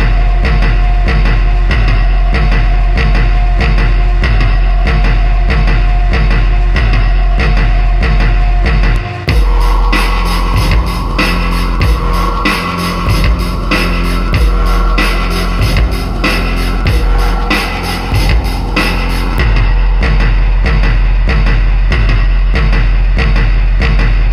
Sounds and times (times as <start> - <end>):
Music: 0.0 - 24.3.